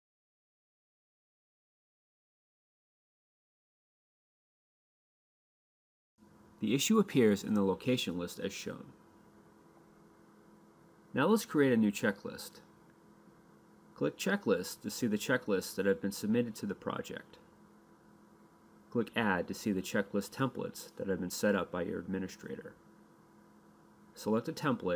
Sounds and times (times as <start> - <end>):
Speech: 6.6 - 9.0, 11.1 - 12.7, 14.0 - 17.4, 18.9 - 22.8, 24.2 - 24.9.